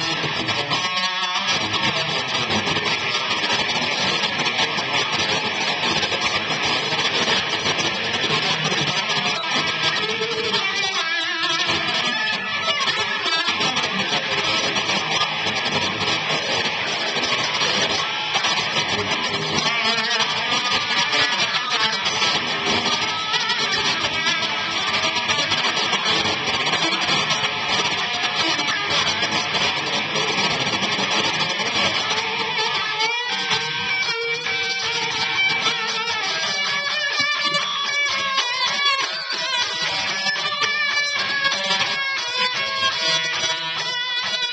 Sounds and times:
Electric guitar: 0:00.0 - 0:44.5.

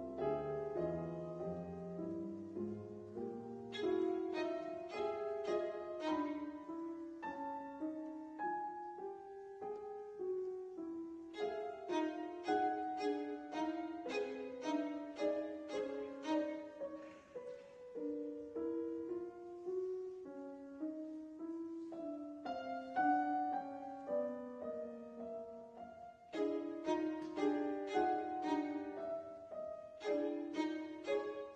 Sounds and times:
Violin, fiddle: 0:03.6 - 0:07.2, 0:11.3 - 0:17.1, 0:26.3 - 0:31.5.

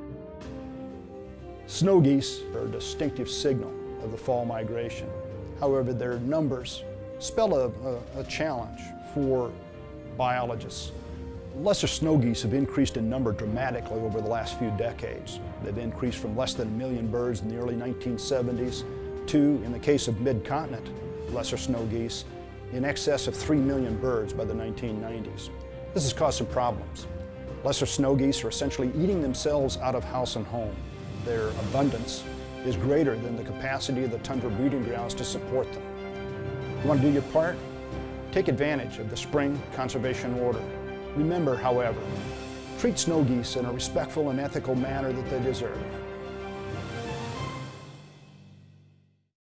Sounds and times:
Music: 0:00.0 - 0:49.4
Speech: 0:01.7 - 0:10.9, 0:11.6 - 0:35.8, 0:36.8 - 0:37.6, 0:38.3 - 0:42.2, 0:42.8 - 0:46.0.

